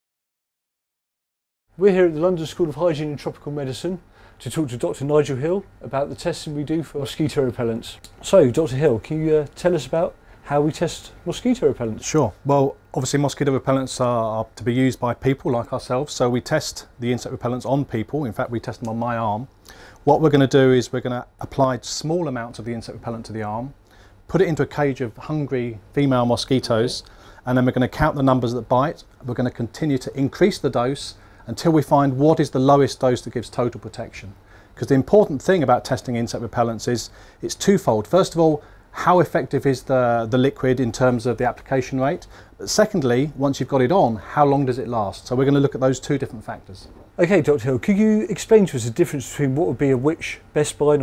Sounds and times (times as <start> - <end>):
Speech: 1.8 - 51.0.